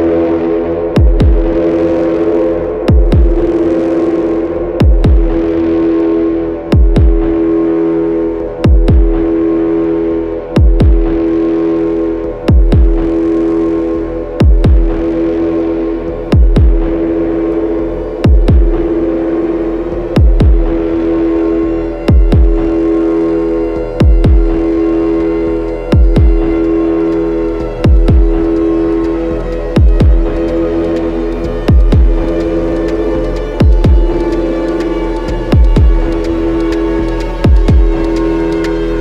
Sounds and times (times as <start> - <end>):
Electronic music: 0.0 - 39.0.